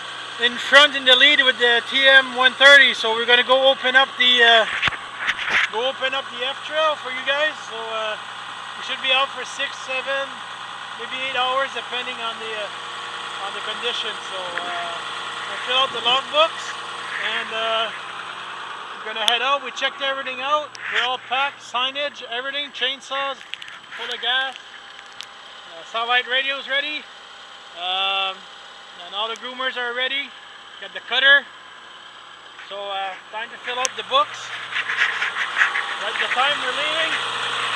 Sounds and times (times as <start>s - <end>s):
Speech: 0.4s - 4.8s, 5.7s - 8.2s, 8.8s - 10.4s, 11.0s - 12.7s, 13.4s - 18.0s, 19.0s - 23.4s, 24.0s - 24.6s, 25.7s - 27.1s, 27.8s - 31.5s, 32.7s - 34.6s, 36.0s - 37.2s.